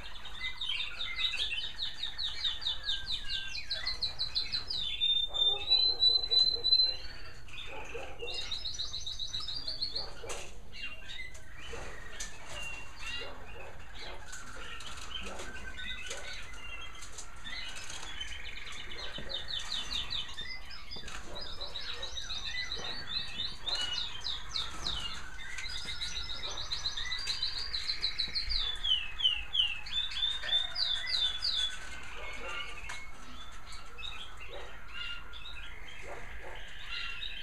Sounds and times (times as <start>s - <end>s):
Bird vocalization, bird call, bird song: 0.0s - 37.4s.